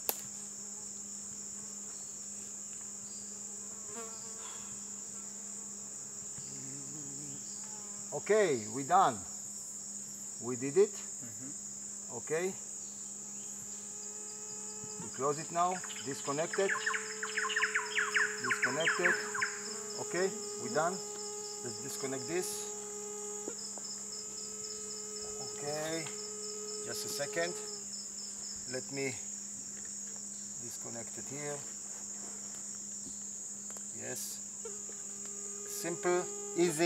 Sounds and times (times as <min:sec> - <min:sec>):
Cricket: 0:00.0 - 0:36.8
Fly, housefly: 0:00.0 - 0:36.8
Mosquito: 0:00.4 - 0:36.8.